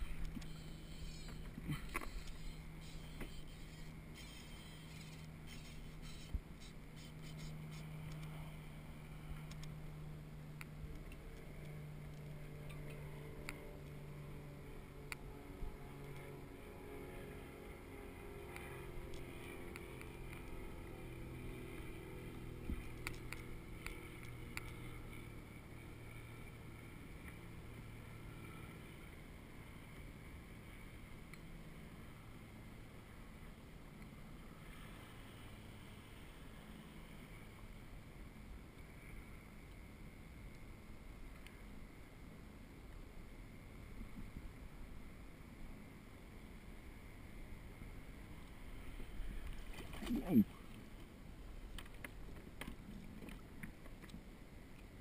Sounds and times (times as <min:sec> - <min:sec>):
Vehicle: 0:00.0 - 0:55.0.